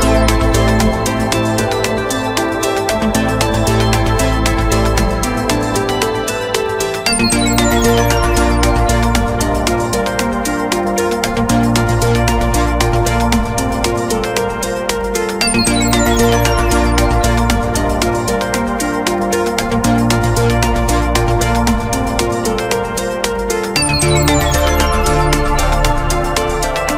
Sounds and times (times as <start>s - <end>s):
Theme music: 0.0s - 26.9s.